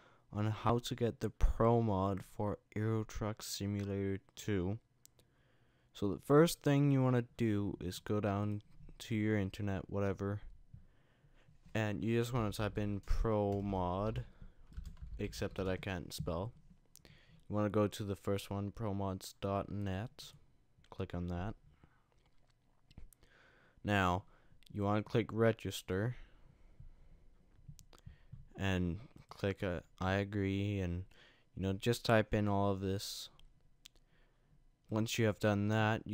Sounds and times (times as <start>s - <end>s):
Speech: 0.3s - 4.8s, 6.0s - 10.5s, 11.7s - 14.3s, 15.2s - 16.6s, 17.5s - 21.6s, 23.8s - 26.3s, 28.6s - 33.4s, 34.9s - 36.1s.